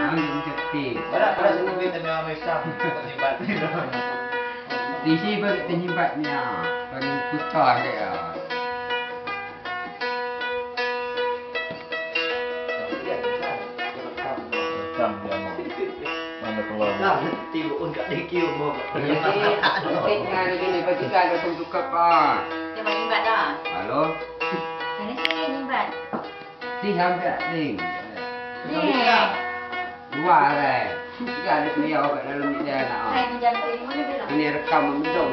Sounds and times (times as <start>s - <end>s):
Music: 0.0s - 35.3s.